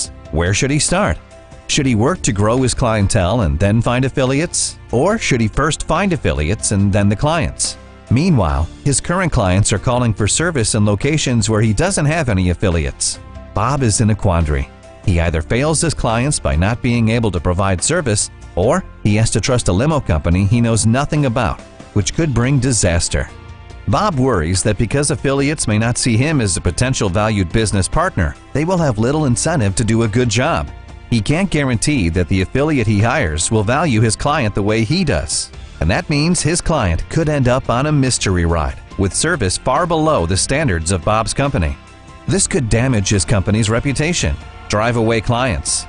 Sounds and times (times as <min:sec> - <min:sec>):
Speech: 0:00.0 - 0:23.3, 0:23.9 - 0:45.8
Music: 0:00.0 - 0:45.8.